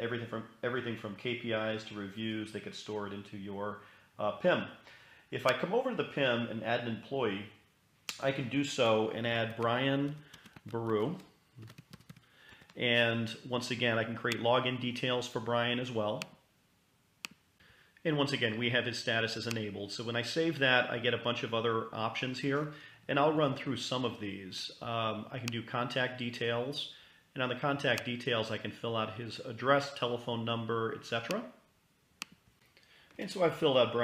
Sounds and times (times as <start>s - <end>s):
Computer keyboard: 10.1s - 12.8s.